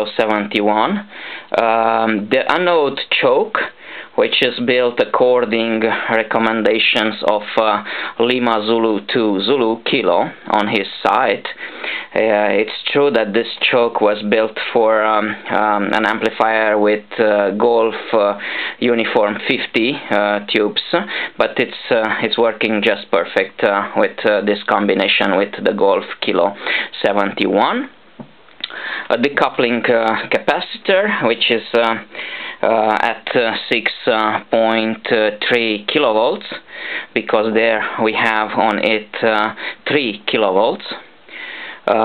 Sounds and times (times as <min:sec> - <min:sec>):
Speech: 0:00.0 - 0:28.0, 0:29.1 - 0:41.1, 0:41.8 - 0:42.0.